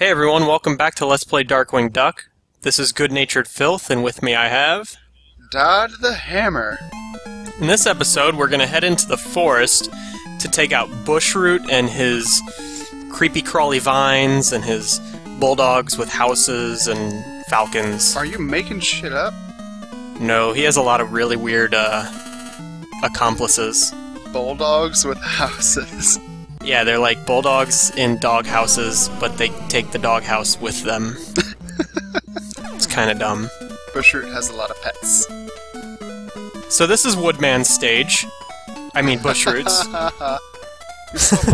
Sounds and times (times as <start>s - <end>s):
Speech: 0.0s - 6.8s, 7.6s - 12.5s, 13.1s - 19.3s, 20.2s - 22.1s, 23.0s - 31.6s, 32.4s - 35.3s, 36.7s - 38.3s, 39.0s - 40.4s.